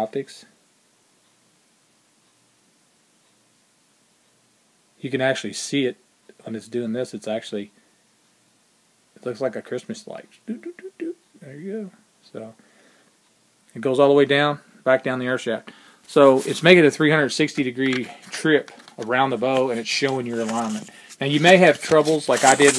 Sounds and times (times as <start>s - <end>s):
Speech: 0.0s - 0.6s, 5.0s - 7.8s, 9.2s - 12.6s, 13.7s - 22.7s.